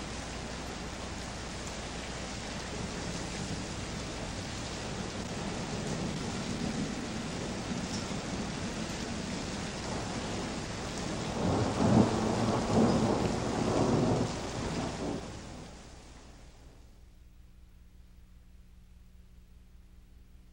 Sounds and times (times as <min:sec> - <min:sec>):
Rain on surface: 0:00.0 - 0:17.0
Thunder: 0:05.3 - 0:15.8.